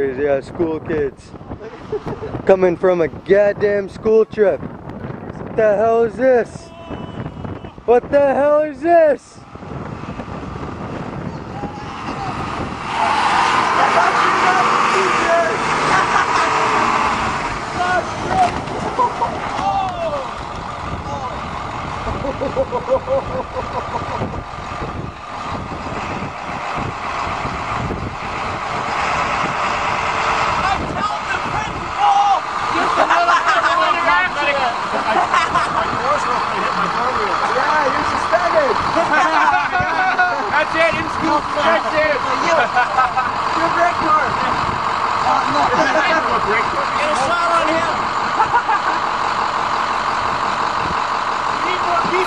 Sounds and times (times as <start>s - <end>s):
Bus: 0.0s - 52.2s.